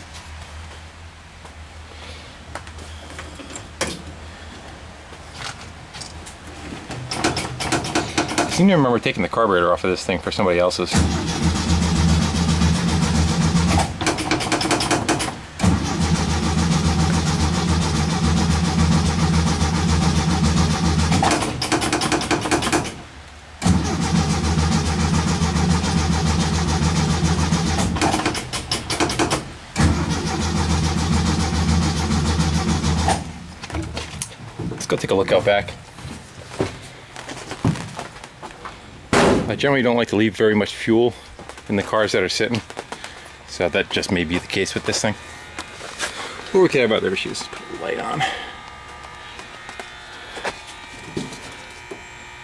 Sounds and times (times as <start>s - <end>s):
Speech: 8.6s - 11.0s, 34.8s - 35.8s, 39.5s - 42.6s, 43.5s - 45.2s, 46.5s - 48.4s
Car: 10.9s - 33.6s.